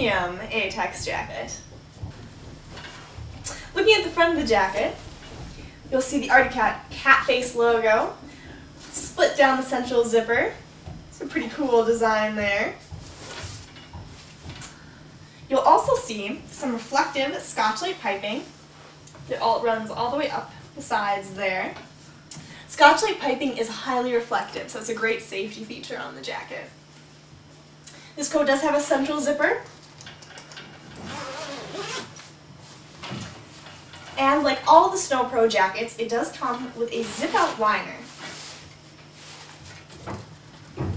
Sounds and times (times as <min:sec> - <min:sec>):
Speech: 0:00.0 - 0:01.6, 0:03.6 - 0:05.0, 0:05.9 - 0:08.2, 0:08.9 - 0:10.6, 0:11.2 - 0:12.8, 0:15.5 - 0:18.6, 0:19.3 - 0:21.9, 0:22.7 - 0:26.8, 0:28.2 - 0:29.7, 0:34.2 - 0:38.1.